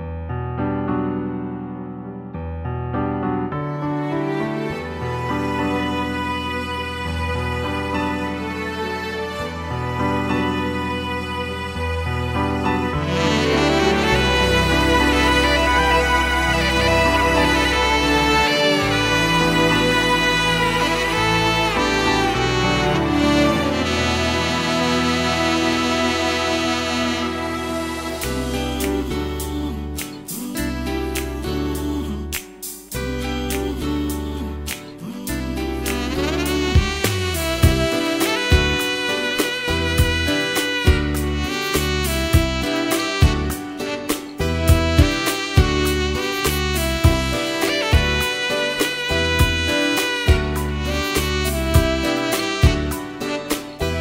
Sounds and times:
Guitar: 0.0 - 54.0
Bowed string instrument: 3.6 - 54.0.

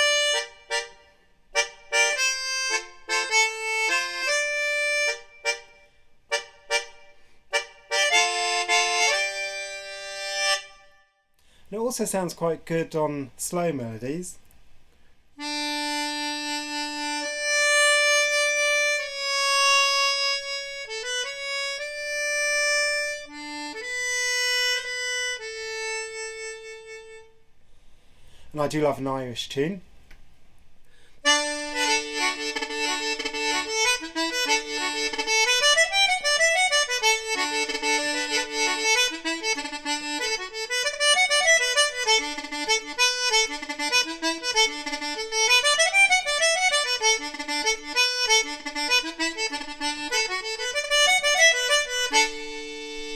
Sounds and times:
Accordion: 0.0 - 11.1, 15.4 - 27.4, 31.2 - 53.1.

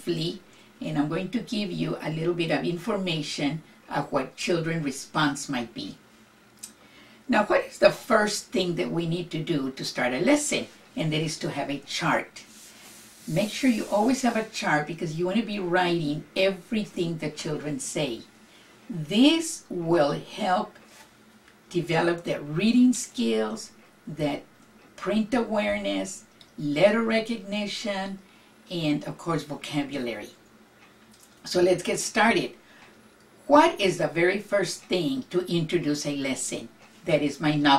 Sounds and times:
Speech: 0.0 - 6.0, 7.3 - 12.5, 13.2 - 18.3, 18.9 - 20.8, 21.7 - 30.4, 31.4 - 32.6, 33.4 - 37.7.

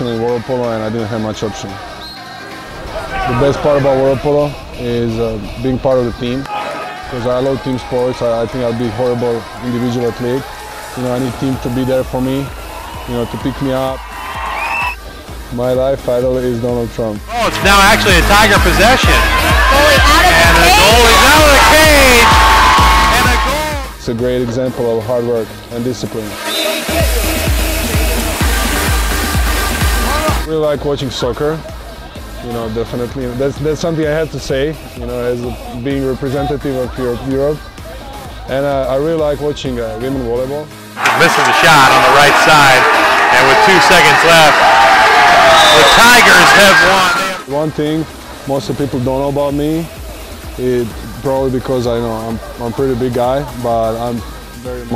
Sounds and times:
Music: 0.0 - 54.9.

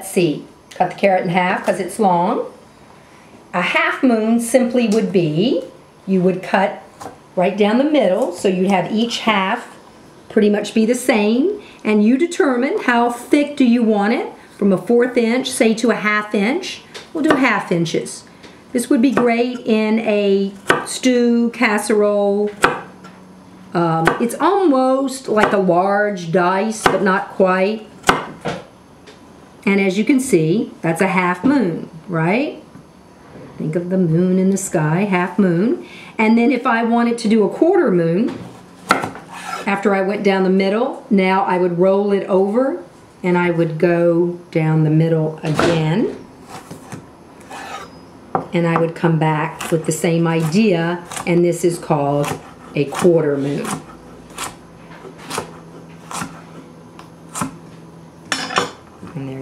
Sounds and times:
Speech: 0.0 - 2.5, 3.6 - 6.8, 7.4 - 9.7, 10.3 - 22.6, 23.8 - 27.9, 29.6 - 32.6, 33.6 - 38.4, 39.7 - 46.2, 48.6 - 53.8, 59.0 - 59.4.

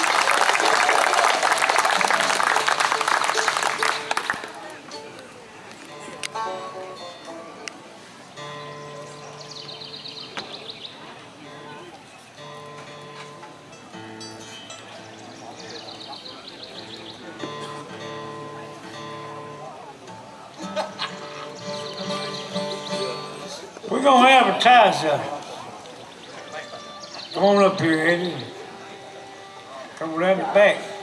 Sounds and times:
Music: 1.5 - 23.8, 26.3 - 31.0.

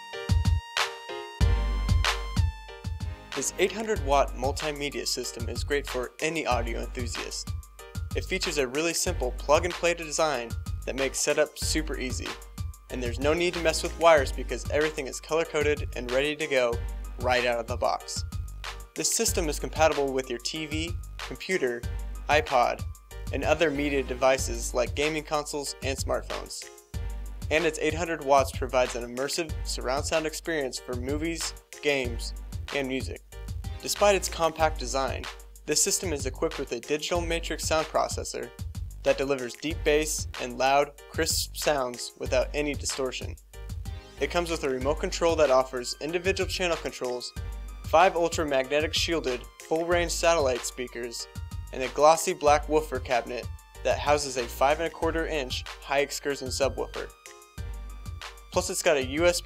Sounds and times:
Music: 0.0 - 59.4
Speech: 3.4 - 7.5, 8.1 - 18.2, 19.0 - 26.7, 27.5 - 33.2, 33.8 - 38.5, 39.1 - 43.4, 44.2 - 57.1, 58.6 - 59.4.

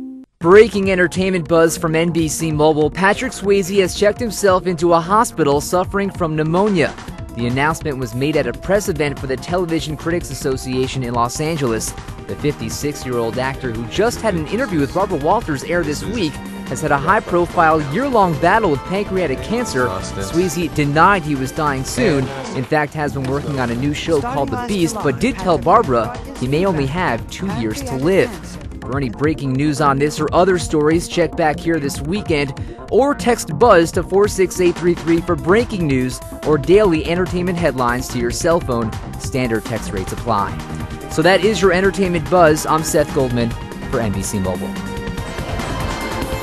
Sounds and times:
Music: 0.0 - 46.4
Speech: 0.4 - 44.8.

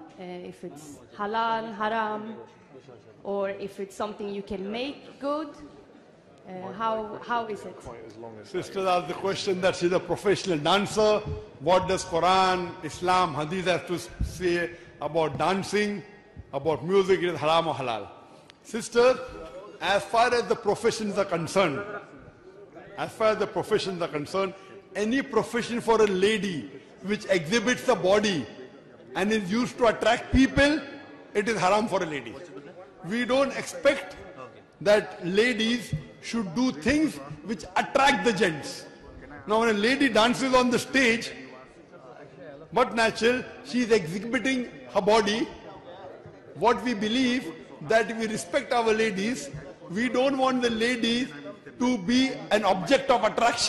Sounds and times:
Speech: 6.4 - 18.1, 18.7 - 53.6.

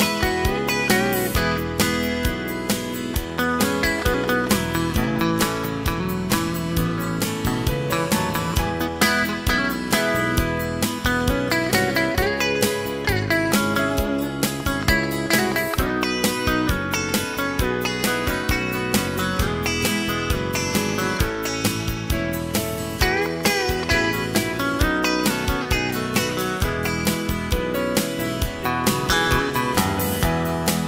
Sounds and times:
Music: 0.0 - 30.8.

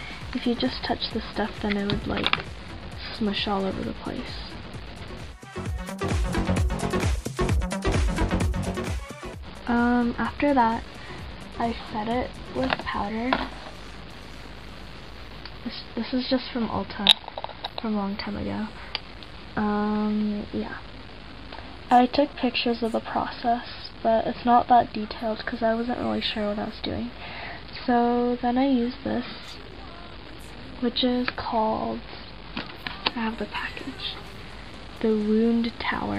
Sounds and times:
Inside, small room: 0.0 - 36.1
Speech: 0.1 - 2.4, 3.0 - 4.6, 9.7 - 10.8, 11.6 - 13.6, 15.6 - 17.1, 17.8 - 18.8, 19.6 - 20.8, 21.9 - 36.1.

